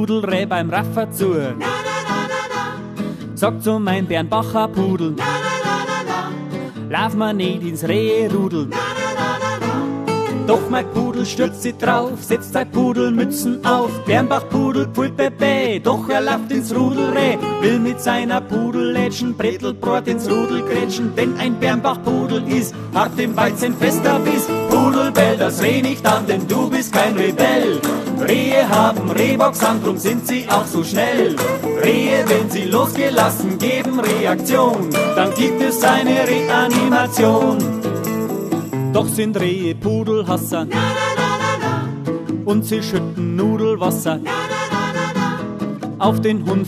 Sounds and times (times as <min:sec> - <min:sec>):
Music: 0:00.0 - 0:46.6.